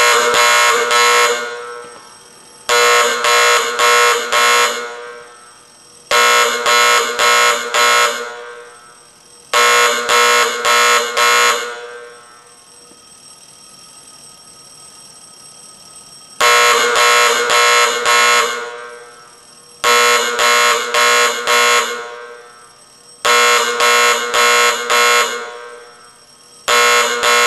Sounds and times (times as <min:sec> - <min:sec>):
Buzzer: 0:00.0 - 0:01.9, 0:02.7 - 0:05.4, 0:06.1 - 0:08.8, 0:09.6 - 0:12.2, 0:16.4 - 0:19.2, 0:19.9 - 0:22.5, 0:23.3 - 0:26.0, 0:26.7 - 0:27.4.